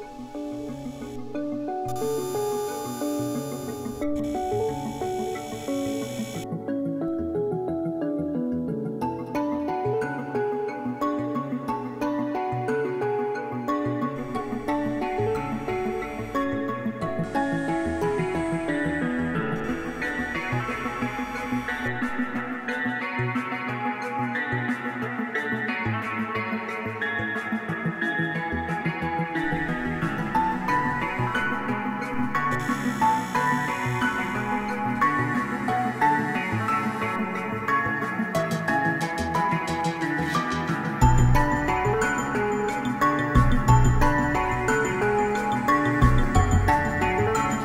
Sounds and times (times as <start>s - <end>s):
Music: 0.0s - 47.6s.